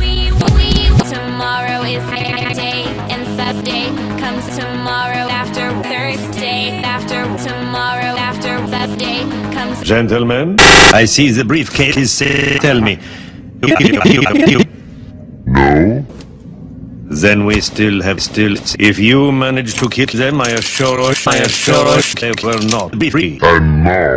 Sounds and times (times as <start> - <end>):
Music: 0.0 - 9.9
Speech: 0.0 - 14.7, 15.5 - 16.1, 17.1 - 24.1.